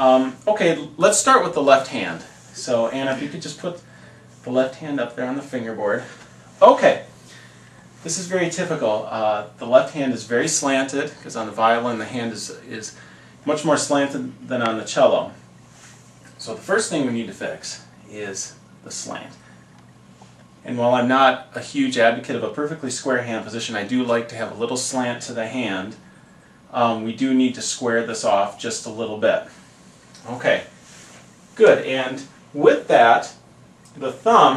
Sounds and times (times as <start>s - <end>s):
Speech: 0.0s - 7.1s, 8.0s - 15.4s, 16.4s - 19.4s, 20.6s - 26.0s, 26.7s - 29.6s, 30.2s - 30.8s, 31.6s - 34.5s.